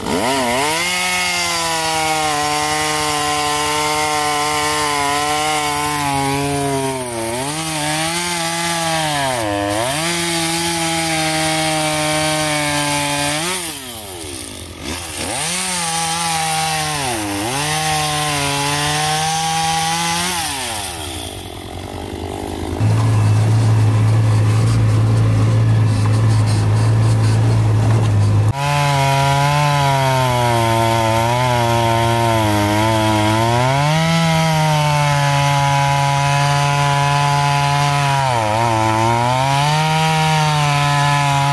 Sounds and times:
Power tool: 0.0s - 41.5s.

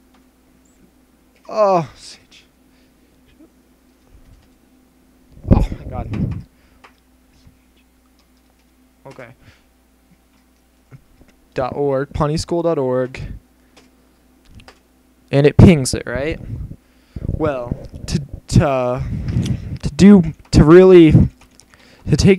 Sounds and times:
Speech: 1.5s - 2.5s, 5.5s - 6.2s, 9.1s - 9.4s, 11.6s - 13.4s, 15.3s - 16.4s, 17.4s - 19.1s, 19.8s - 21.3s, 22.1s - 22.3s.

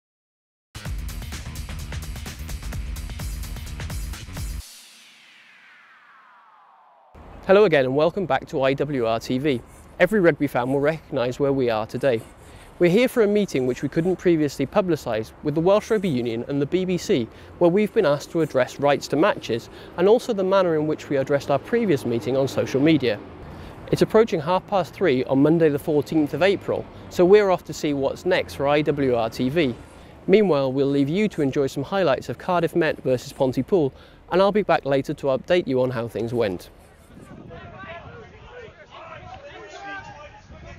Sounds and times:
Speech: 7.5s - 23.2s, 23.9s - 36.7s.

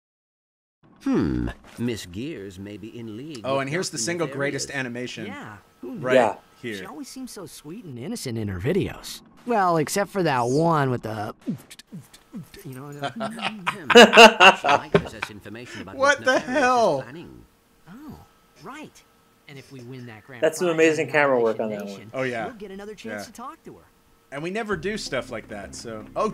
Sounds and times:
Speech: 12.5s - 17.4s, 18.7s - 23.8s, 24.4s - 26.3s.

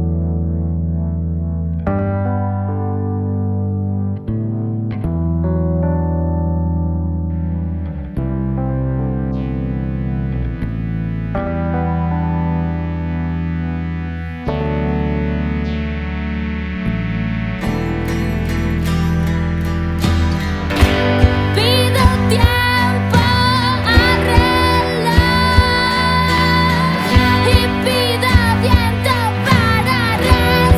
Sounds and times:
Ambient music: 0.0s - 30.7s
Synthesizer: 0.0s - 30.7s.

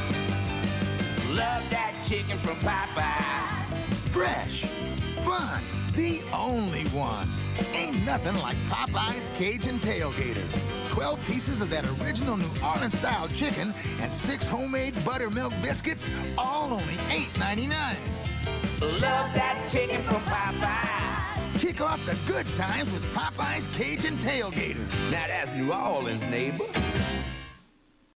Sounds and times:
Music: 0.0s - 27.8s
Speech: 4.1s - 18.0s, 21.6s - 26.8s.

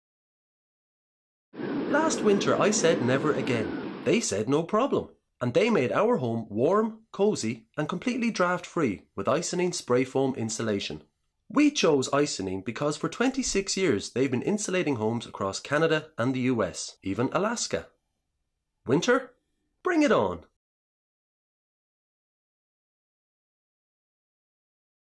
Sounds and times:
Speech: 1.9s - 18.0s, 18.8s - 20.6s.

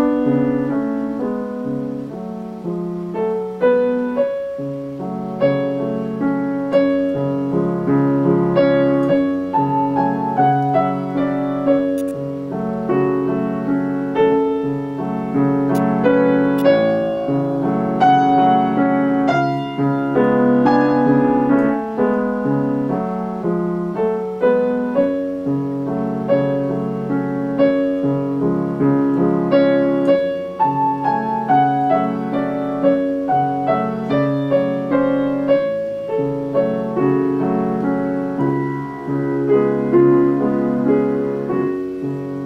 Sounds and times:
Music: 0.0s - 42.4s.

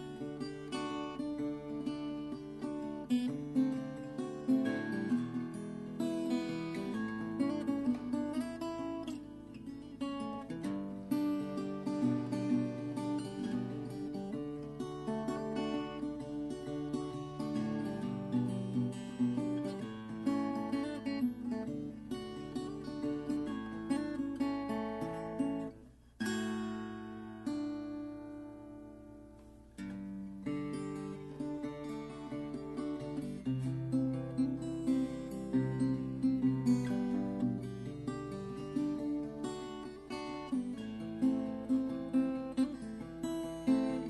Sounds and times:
Acoustic guitar: 0.0s - 44.0s
Strum: 0.0s - 44.0s.

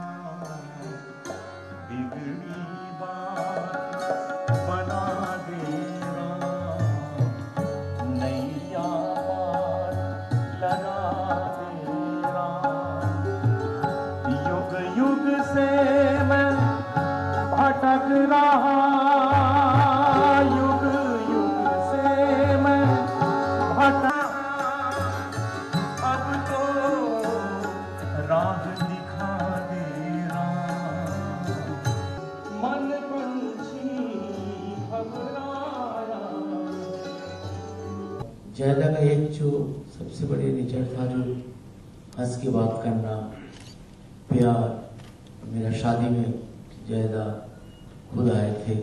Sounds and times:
Tabla: 0.0s - 48.8s.

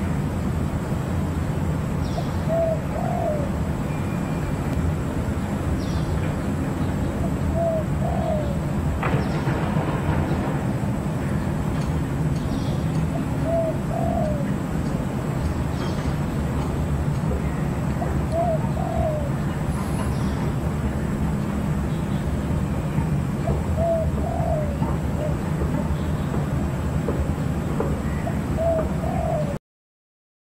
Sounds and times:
Coo: 2.5s - 3.5s, 7.5s - 8.6s, 13.4s - 14.5s, 18.3s - 19.3s, 23.8s - 25.3s, 28.6s - 29.6s.

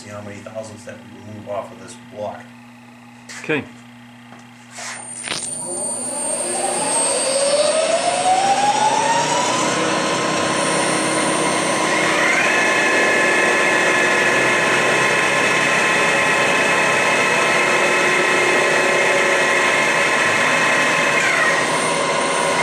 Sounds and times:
Heavy engine (low frequency): 5.4s - 22.6s.

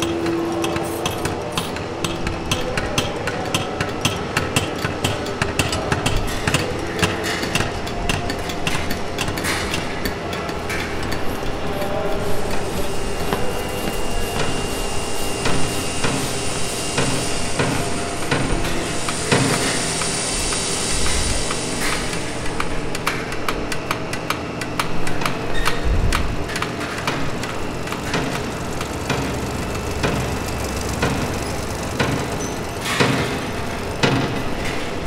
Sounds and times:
Speech: 0.6s - 7.6s, 11.5s - 14.7s.

